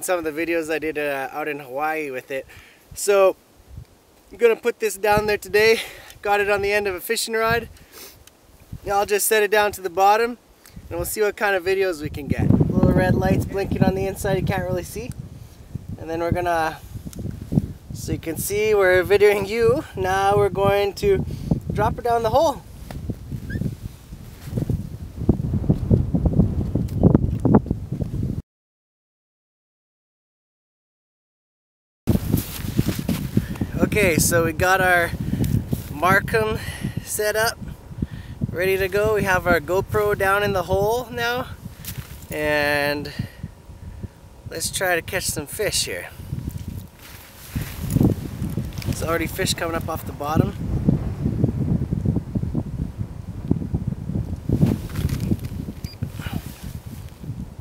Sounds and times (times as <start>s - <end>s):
Speech: 0.0s - 3.4s, 4.4s - 7.7s, 8.9s - 15.1s, 16.0s - 16.8s, 18.0s - 21.2s, 21.8s - 22.6s, 33.8s - 35.1s, 35.9s - 37.6s, 38.6s - 41.5s, 42.3s - 43.2s, 44.5s - 46.2s, 49.0s - 50.6s
Outside, rural or natural: 0.0s - 28.4s, 32.1s - 57.6s.